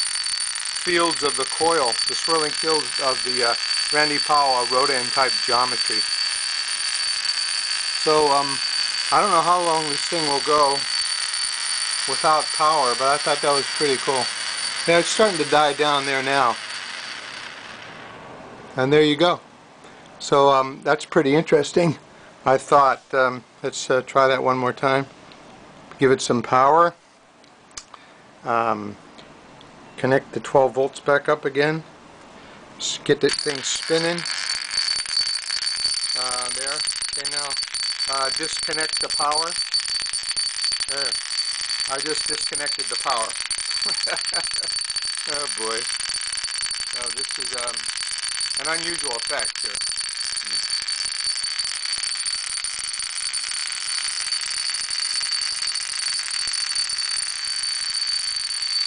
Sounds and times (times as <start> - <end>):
Speech: 0.9 - 6.0, 8.1 - 10.8, 12.1 - 14.3, 14.9 - 16.6, 18.8 - 19.4, 20.2 - 25.1, 26.0 - 27.0, 28.5 - 29.0, 30.0 - 31.9, 32.8 - 34.2, 36.2 - 39.6, 40.9 - 41.1, 41.9 - 43.3, 45.3 - 45.8, 47.0 - 47.8, 48.6 - 49.5.